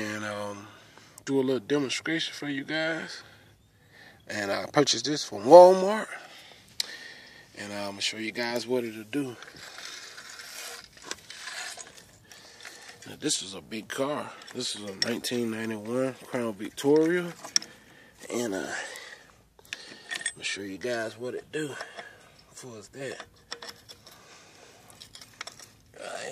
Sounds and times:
Speech: 0.0 - 0.7, 1.3 - 3.2, 4.3 - 6.2, 7.6 - 9.4, 13.1 - 17.4, 18.2 - 19.0, 20.4 - 21.9, 22.6 - 23.3.

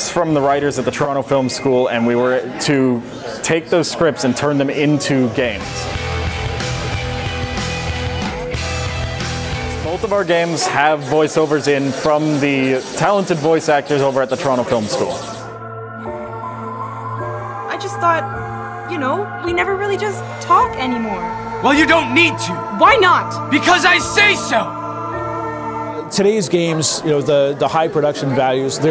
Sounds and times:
Music: 4.3 - 28.9
Speech: 9.8 - 15.2.

